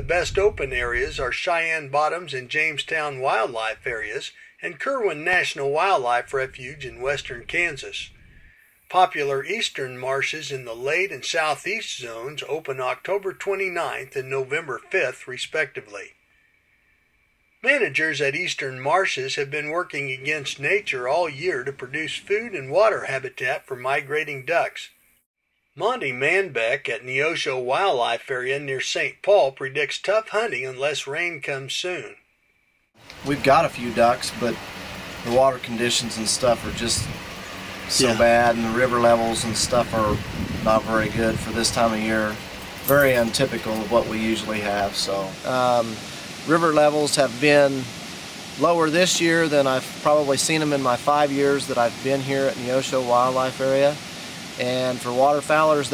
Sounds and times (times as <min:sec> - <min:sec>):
Speech: 0:00.0 - 0:08.1, 0:08.9 - 0:16.2, 0:17.6 - 0:24.9, 0:25.8 - 0:32.2, 0:33.1 - 0:34.6, 0:35.2 - 0:37.1, 0:37.9 - 0:47.9, 0:48.6 - 0:54.0, 0:54.6 - 0:55.9.